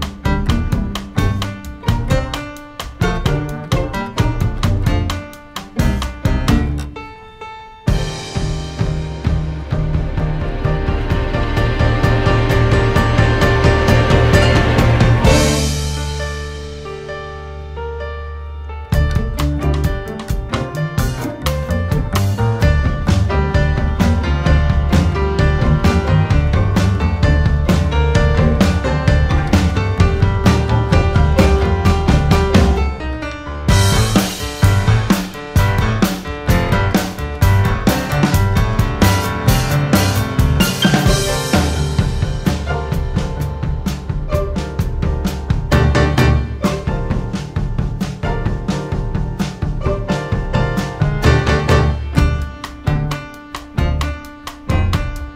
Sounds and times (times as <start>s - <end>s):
Music: 0.0s - 55.3s.